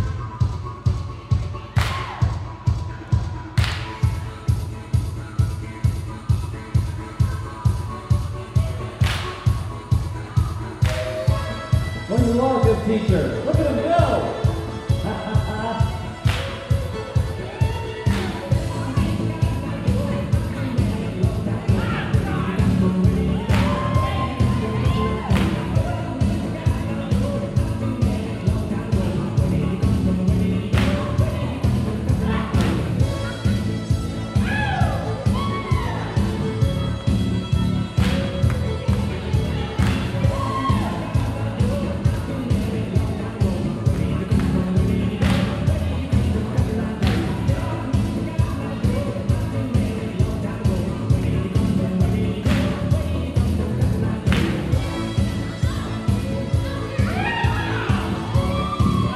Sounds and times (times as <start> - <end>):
Crowd: 0.0 - 59.1
Music: 0.0 - 59.1
Speech: 12.1 - 14.4.